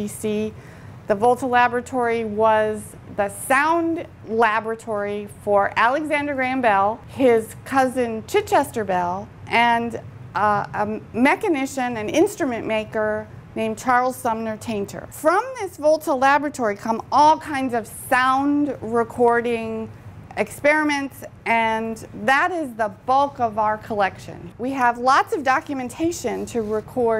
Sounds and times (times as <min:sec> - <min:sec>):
Speech: 0:00.0 - 0:27.1.